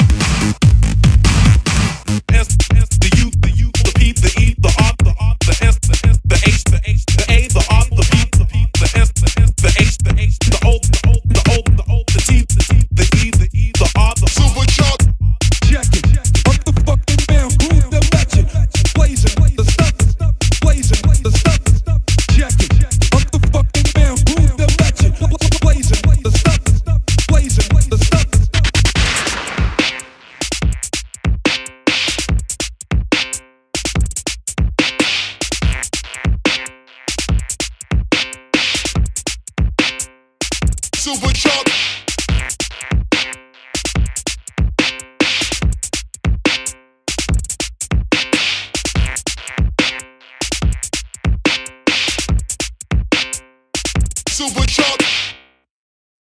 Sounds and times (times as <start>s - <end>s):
House music: 0.0s - 31.1s, 35.0s - 39.2s, 41.0s - 45.9s, 48.2s - 52.6s, 54.3s - 55.2s
Dubstep: 0.0s - 32.6s, 34.9s - 39.3s, 40.9s - 45.7s, 48.2s - 52.6s, 54.2s - 55.3s
Drum and bass: 0.0s - 55.3s.